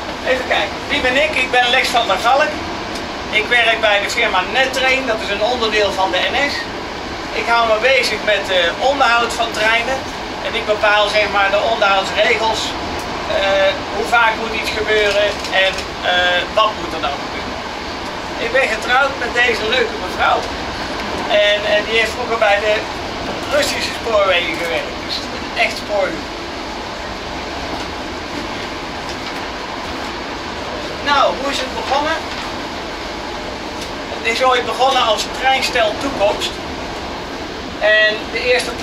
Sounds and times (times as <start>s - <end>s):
Speech: 0.2s - 2.6s, 3.3s - 6.7s, 7.3s - 17.5s, 18.4s - 20.5s, 21.3s - 26.2s, 31.0s - 32.3s, 34.1s - 36.6s, 37.8s - 38.8s.